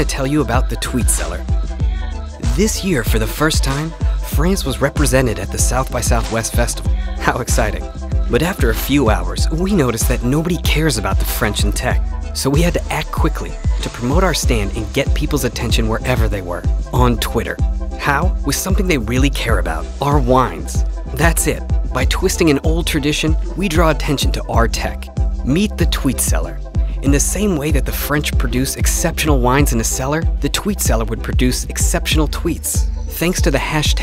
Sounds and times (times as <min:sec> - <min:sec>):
Speech: 0:00.0 - 0:01.4, 0:02.4 - 0:34.0
Music: 0:00.0 - 0:34.0.